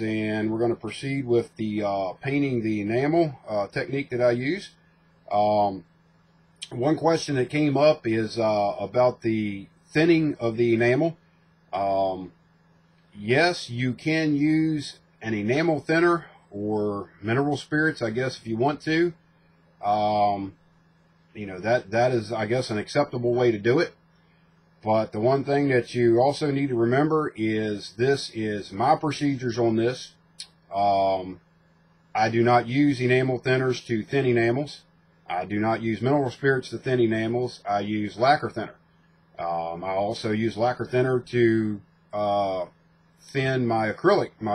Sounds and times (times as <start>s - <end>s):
Speech: 0.0s - 5.9s, 6.6s - 12.4s, 13.1s - 19.2s, 19.8s - 20.6s, 21.3s - 24.0s, 24.8s - 31.5s, 32.1s - 38.8s, 39.4s - 44.5s.